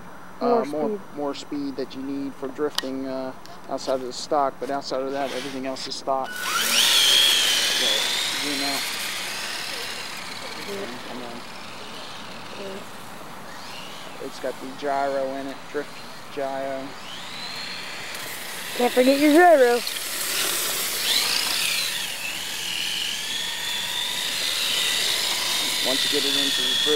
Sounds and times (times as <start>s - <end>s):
Speech: 0.4s - 6.3s, 7.8s - 8.8s, 14.2s - 16.9s, 25.6s - 26.9s.